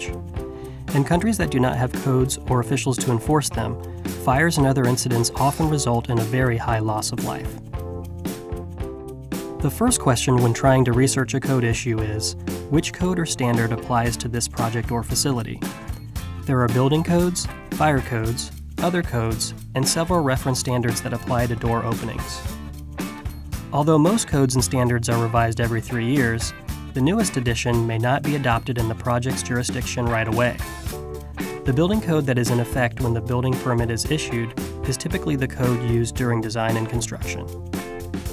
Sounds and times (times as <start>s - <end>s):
Speech: 0.0s - 0.2s, 0.9s - 7.6s, 9.6s - 15.7s, 16.5s - 22.5s, 23.7s - 30.8s, 31.7s - 37.5s
Music: 0.0s - 38.3s.